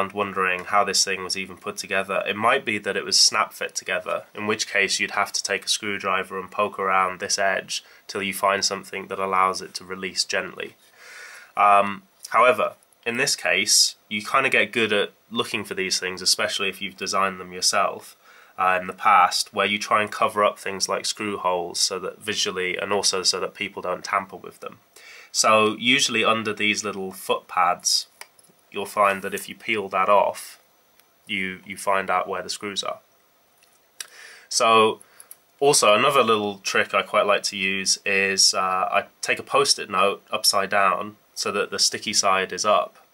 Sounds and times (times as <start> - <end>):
Speech: 0.0 - 10.8, 11.6 - 30.6, 31.3 - 33.0, 34.5 - 35.0, 35.6 - 43.1.